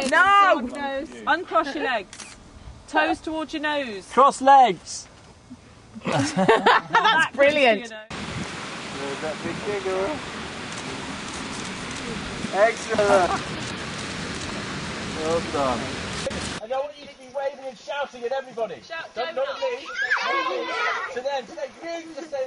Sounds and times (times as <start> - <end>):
Rain on surface: 8.1 - 16.6.